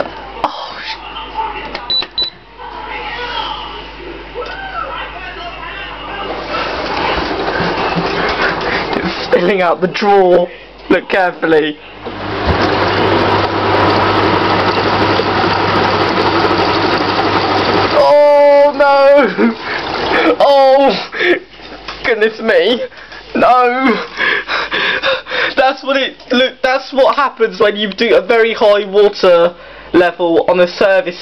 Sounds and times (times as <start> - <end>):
Speech: 0.0 - 7.2, 9.0 - 12.0, 18.0 - 19.6, 20.2 - 21.4, 22.0 - 24.1, 25.6 - 31.2
Gurgling: 19.2 - 21.1.